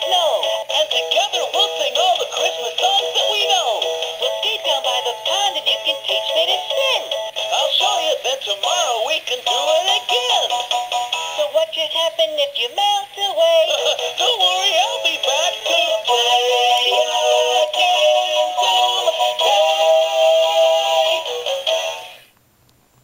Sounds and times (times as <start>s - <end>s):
Music: 0.0s - 22.3s.